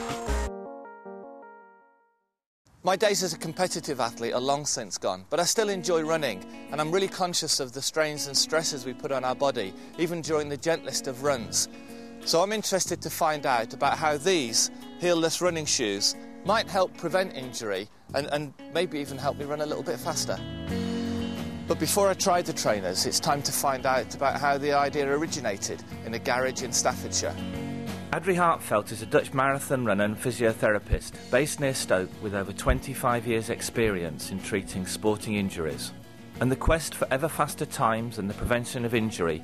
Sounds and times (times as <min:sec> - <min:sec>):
Music: 0:00.0 - 0:39.4
Speech: 0:02.8 - 0:11.7, 0:12.3 - 0:20.4, 0:21.7 - 0:27.4, 0:28.1 - 0:39.4.